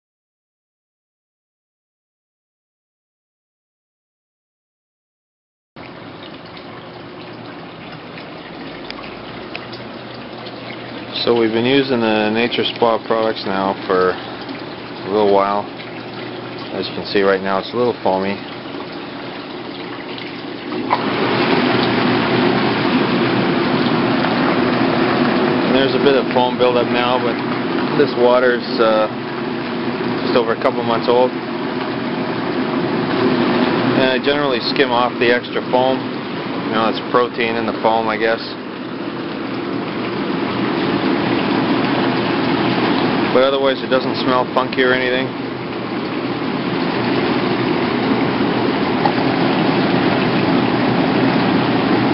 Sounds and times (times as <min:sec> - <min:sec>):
Bathtub (filling or washing): 0:05.8 - 0:52.1
Trickle, dribble: 0:05.8 - 0:52.1
Water: 0:05.8 - 0:52.1.